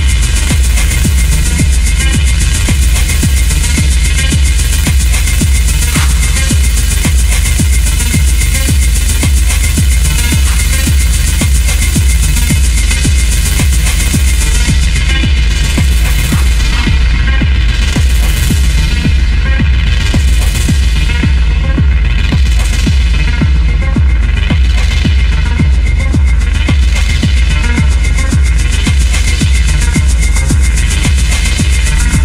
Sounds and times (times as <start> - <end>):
Electronic music: 0.0 - 32.2.